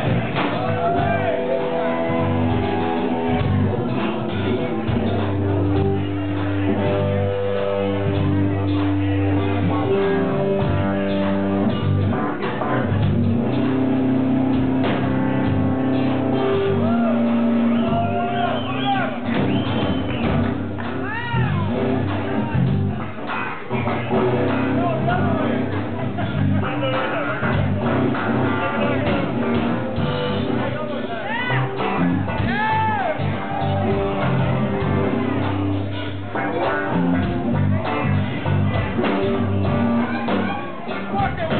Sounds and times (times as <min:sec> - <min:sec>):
Electric guitar: 0:00.0 - 0:41.5
Speech: 0:21.0 - 0:29.7, 0:30.3 - 0:33.2, 0:37.6 - 0:41.5.